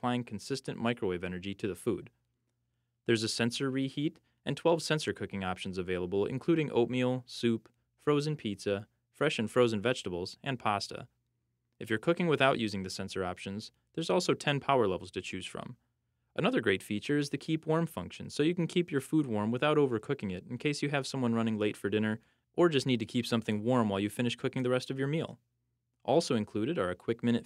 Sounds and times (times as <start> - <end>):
Speech: 0.0 - 2.2, 3.1 - 11.2, 11.8 - 15.8, 16.4 - 27.4.